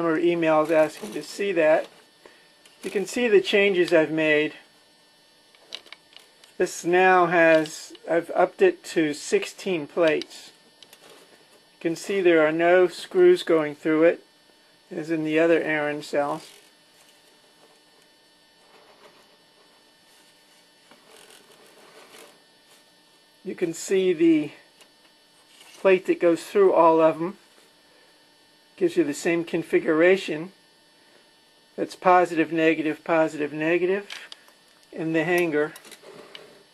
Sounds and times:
Speech: 0.0s - 1.9s, 2.8s - 4.7s, 6.6s - 10.6s, 11.8s - 14.2s, 14.9s - 16.6s, 23.4s - 24.7s, 25.8s - 27.4s, 28.8s - 30.6s, 31.8s - 34.3s, 34.9s - 35.8s.

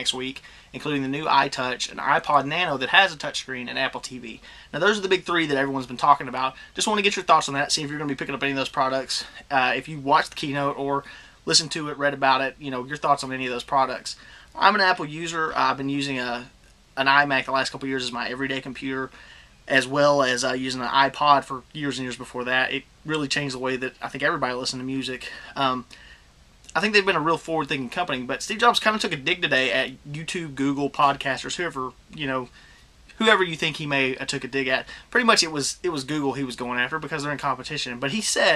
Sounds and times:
Male speech, man speaking: 0.0s - 26.0s, 26.7s - 32.5s, 33.1s - 38.5s
Narration, monologue: 0.0s - 38.5s.

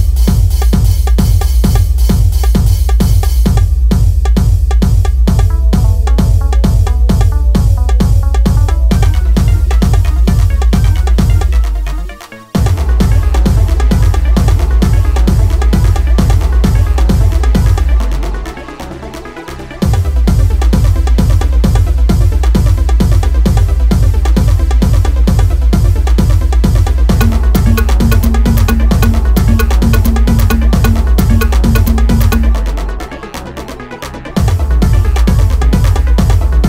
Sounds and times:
Techno: 0.0s - 36.6s.

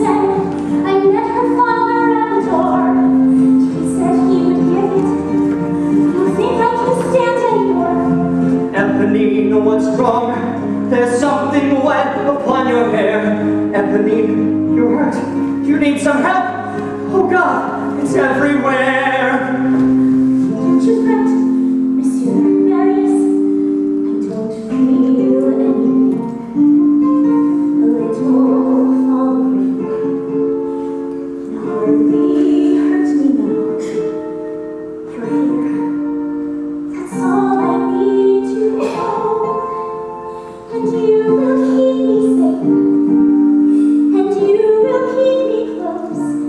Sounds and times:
Music: 0.0s - 46.4s.

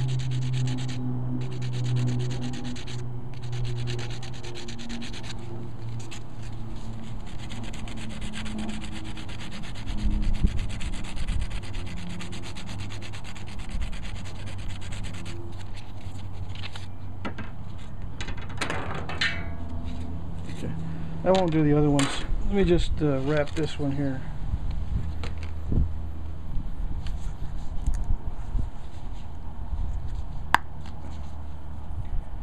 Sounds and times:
Speech: 21.2s - 24.3s.

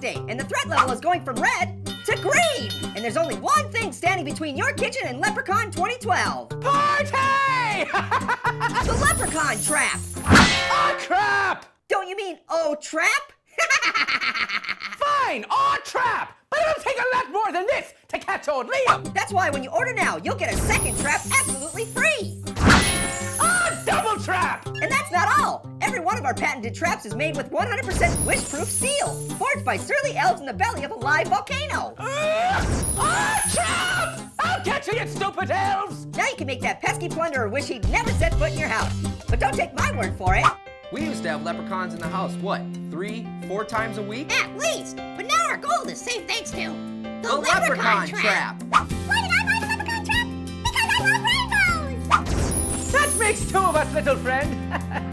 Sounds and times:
Speech: 0.0s - 7.9s, 11.0s - 13.3s, 15.0s - 22.3s, 23.4s - 32.5s, 34.4s - 40.4s, 41.0s - 51.9s
Music: 0.0s - 11.1s, 18.2s - 55.1s.

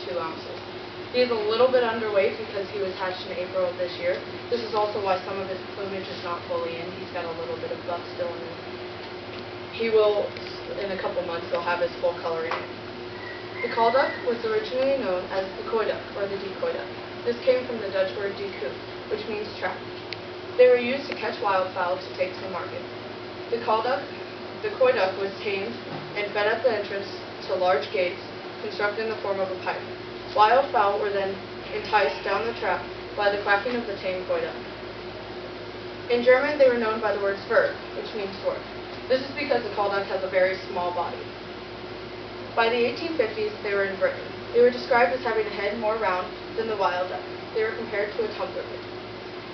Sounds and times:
Speech: 0.0s - 0.6s, 1.2s - 8.6s, 9.8s - 12.7s, 13.6s - 19.8s, 20.6s - 22.9s, 23.5s - 34.6s, 36.1s - 41.3s, 42.6s - 48.8s.

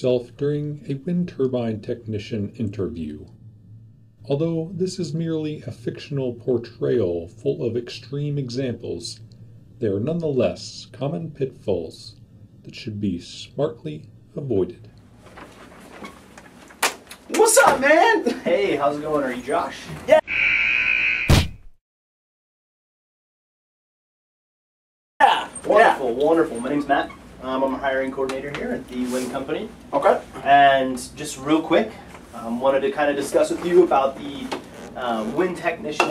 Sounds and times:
Speech: 0.0s - 3.3s, 4.3s - 9.2s, 9.8s - 14.9s, 17.3s - 20.2s, 25.2s - 36.1s.

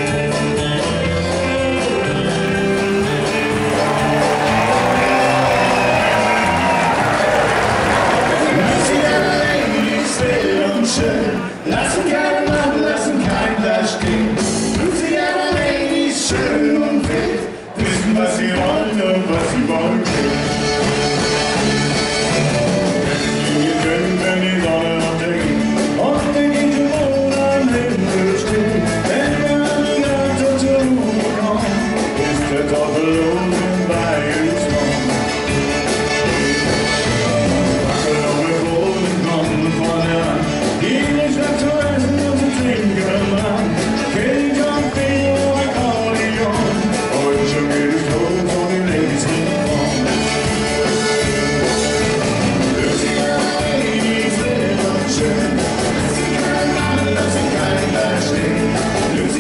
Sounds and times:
Music: 0.0s - 59.4s.

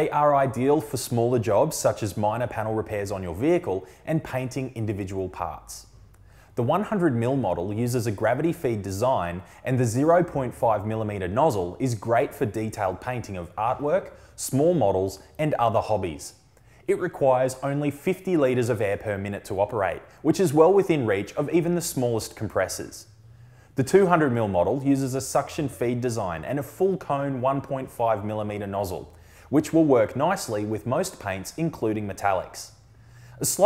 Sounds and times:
Speech: 0.0s - 5.9s, 6.6s - 23.1s, 23.8s - 32.8s, 33.4s - 33.6s.

